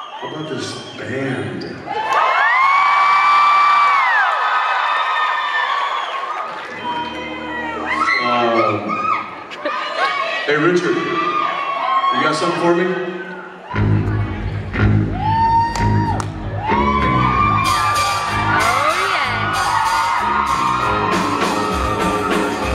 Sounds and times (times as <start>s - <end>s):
Music: 6.8s - 8.7s, 13.7s - 22.7s.